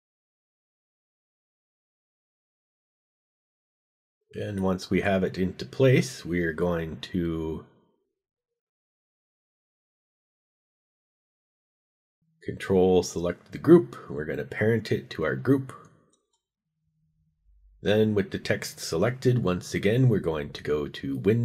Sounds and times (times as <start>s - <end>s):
Speech: 4.4s - 7.8s, 12.4s - 15.9s, 17.8s - 21.4s.